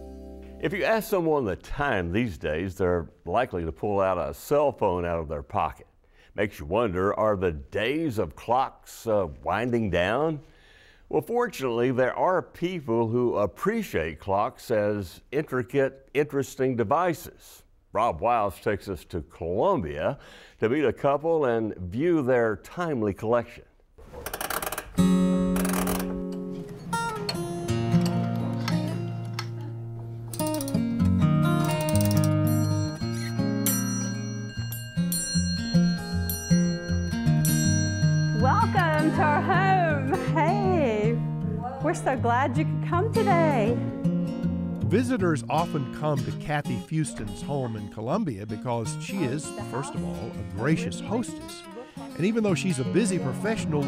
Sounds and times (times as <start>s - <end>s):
Music: 0.0s - 0.9s, 25.0s - 53.8s
Speech: 0.6s - 10.4s, 11.1s - 23.6s, 38.4s - 43.8s, 44.9s - 53.8s.